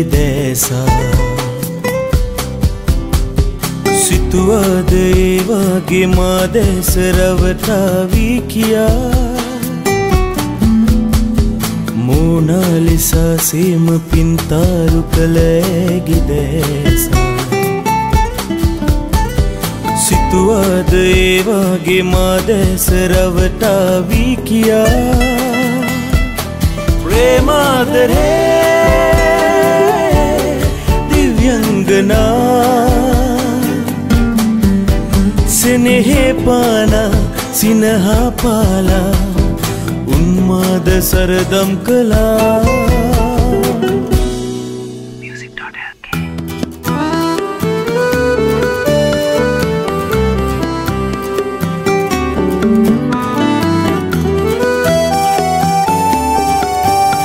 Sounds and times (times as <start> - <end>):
Music: 0.0 - 57.2.